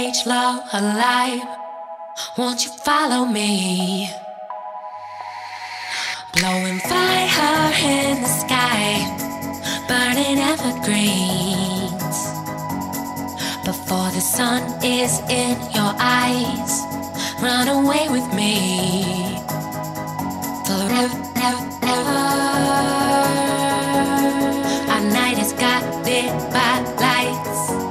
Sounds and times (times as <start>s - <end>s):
Music: 0.0s - 27.9s.